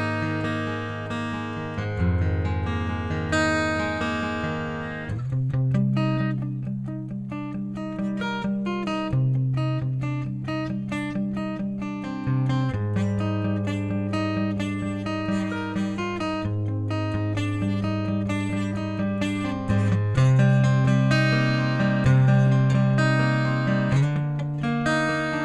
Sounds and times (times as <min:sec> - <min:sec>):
Music: 0:00.0 - 0:25.4.